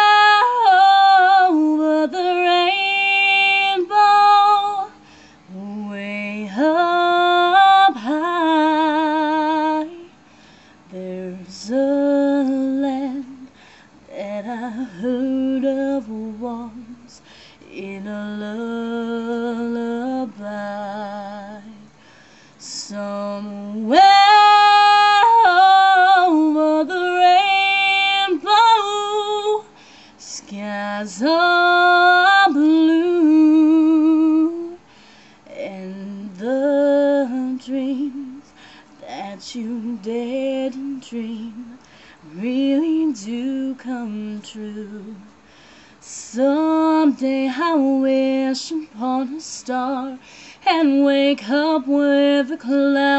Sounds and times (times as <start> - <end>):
Female singing: 0.0 - 10.2, 10.9 - 22.0, 22.6 - 34.9, 35.5 - 45.4, 46.0 - 53.1.